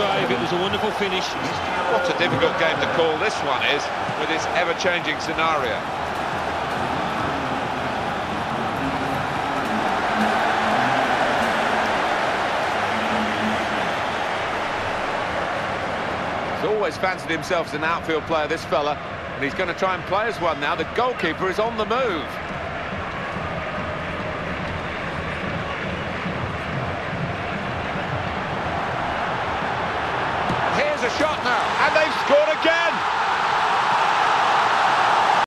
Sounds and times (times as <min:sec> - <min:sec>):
Speech: 0:00.0 - 0:05.8, 0:16.6 - 0:22.3, 0:30.8 - 0:33.0.